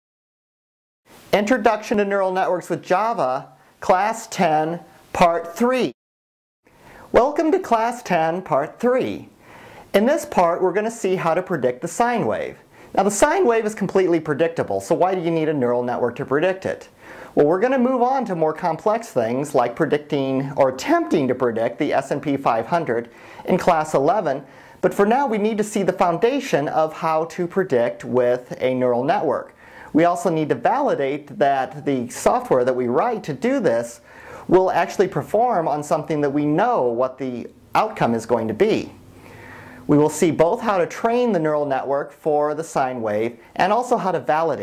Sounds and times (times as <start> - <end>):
Speech: 1.3 - 6.0, 7.1 - 39.0, 39.9 - 44.6.